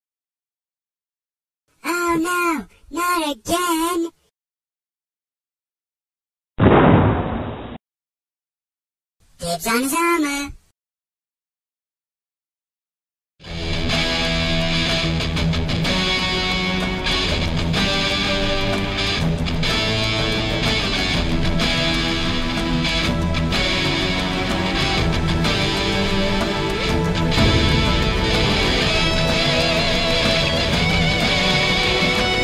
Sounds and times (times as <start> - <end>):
Speech: 1.8 - 4.2, 9.4 - 10.6
Heavy metal: 13.5 - 32.4.